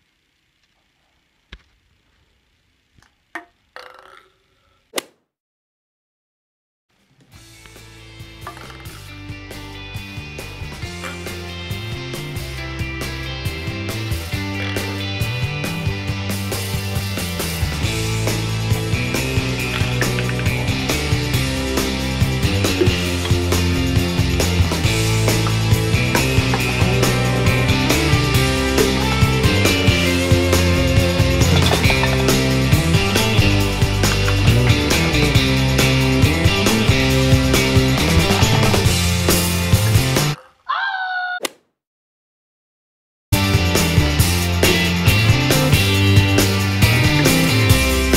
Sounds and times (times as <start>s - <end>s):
Music: 7.0s - 40.4s, 43.3s - 48.1s.